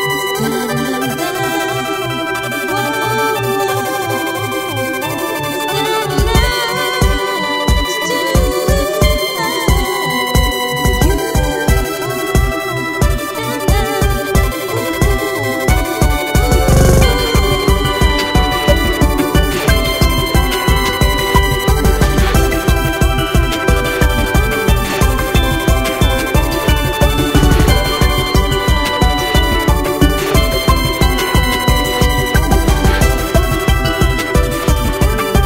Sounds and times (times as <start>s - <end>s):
Trance music: 0.0s - 35.4s.